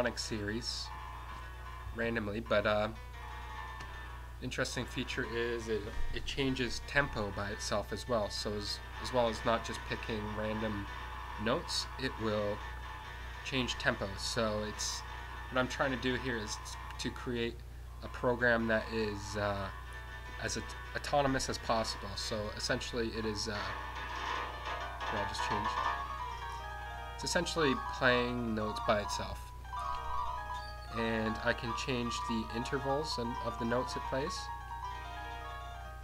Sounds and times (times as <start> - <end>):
Speech: 0.0 - 0.9, 2.0 - 3.0, 4.4 - 12.6, 13.4 - 19.8, 20.4 - 23.8, 25.0 - 25.8, 27.2 - 29.5, 31.0 - 34.5
Music: 0.0 - 36.0.